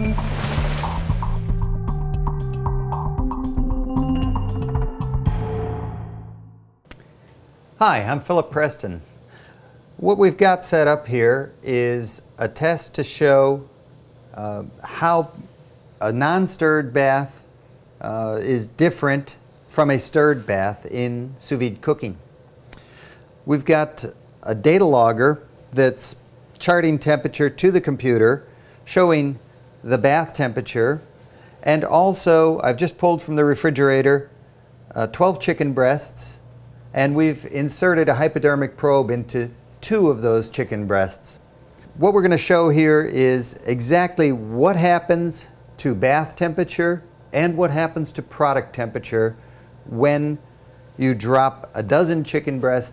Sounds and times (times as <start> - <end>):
Speech: 7.8 - 9.1, 10.0 - 13.7, 14.3 - 22.2, 23.4 - 34.3, 34.9 - 36.4, 37.0 - 50.4, 51.0 - 52.9.